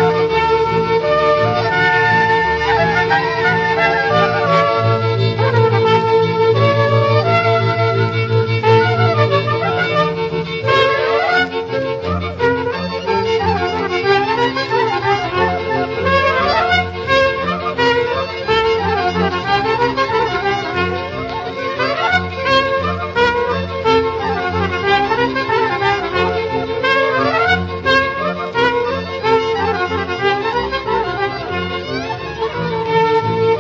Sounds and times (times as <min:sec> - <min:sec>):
Music: 0:00.0 - 0:33.6.